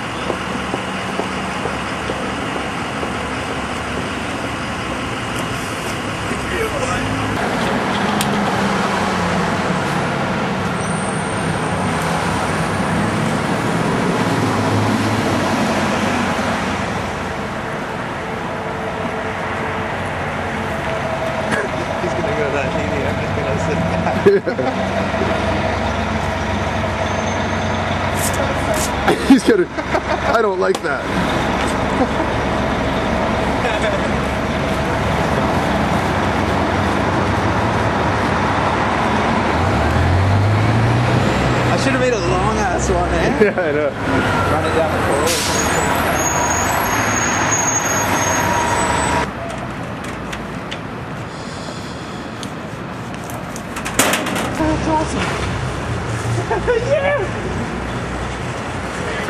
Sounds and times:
Bus: 0.0s - 59.3s
Traffic noise, roadway noise: 0.0s - 59.3s.

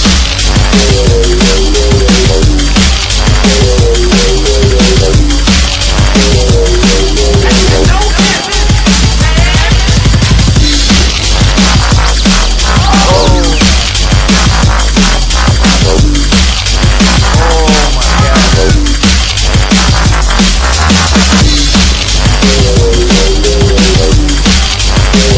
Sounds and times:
Speech: 7.4s - 9.8s, 12.8s - 13.6s, 17.4s - 18.8s.

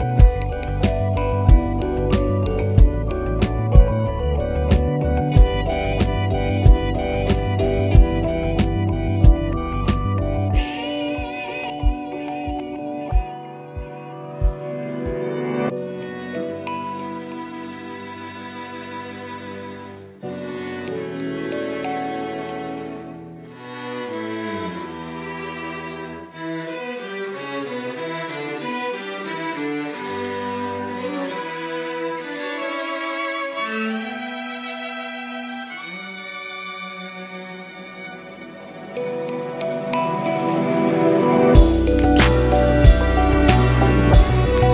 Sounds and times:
Violin, fiddle: 13.7s - 44.7s.

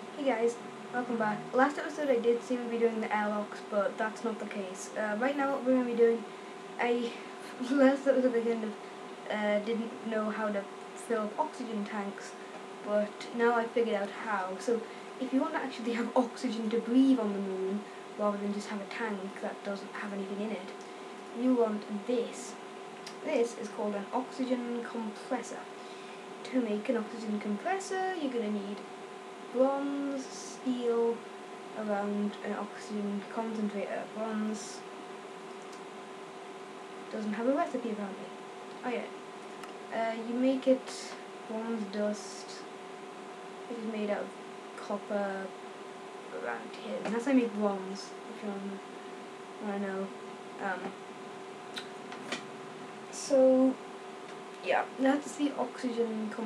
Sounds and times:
Speech: 0.0s - 20.8s, 21.4s - 25.7s, 26.4s - 28.8s, 29.5s - 31.2s, 31.8s - 34.8s, 37.1s - 39.1s, 39.9s - 42.7s, 43.7s - 45.5s, 46.3s - 48.8s, 49.6s - 51.0s, 53.1s - 53.8s, 54.6s - 56.4s.

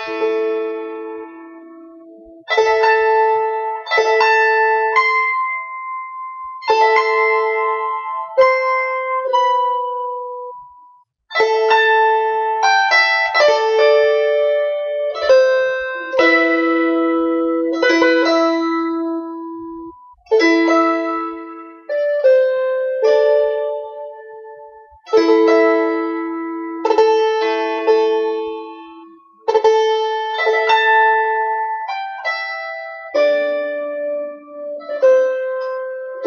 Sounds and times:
Harp: 0.0s - 36.2s
Pizzicato: 11.3s - 36.2s.

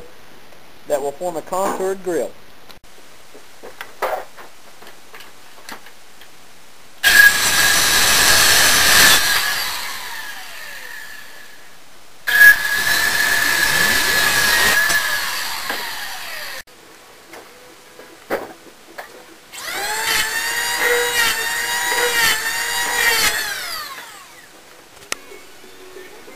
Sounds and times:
Wood: 12.3s - 16.4s.

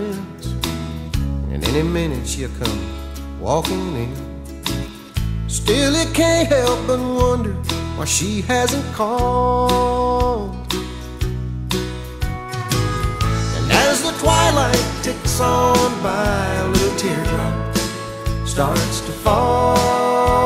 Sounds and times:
Music: 0.0s - 20.4s.

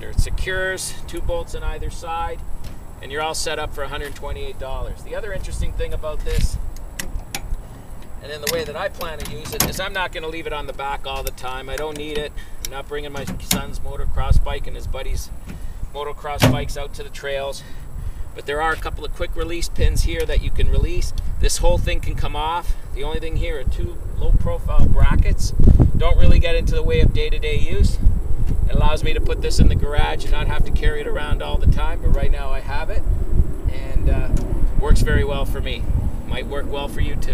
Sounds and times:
Speech: 0.0s - 2.4s, 3.0s - 6.6s, 8.2s - 15.3s, 15.9s - 17.7s, 18.4s - 28.0s, 28.7s - 33.0s, 33.7s - 37.3s.

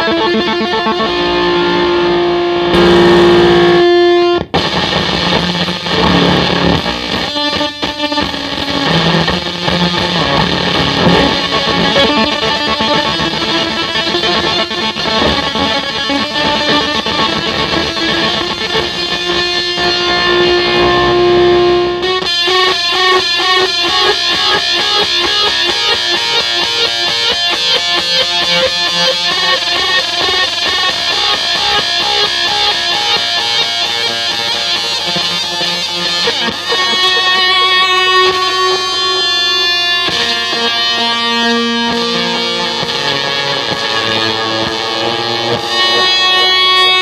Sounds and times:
Cacophony: 0.0s - 47.0s
Distortion: 0.0s - 47.0s
Effects unit: 0.0s - 47.0s
Guitar: 0.0s - 47.0s
Inside, small room: 0.0s - 47.0s.

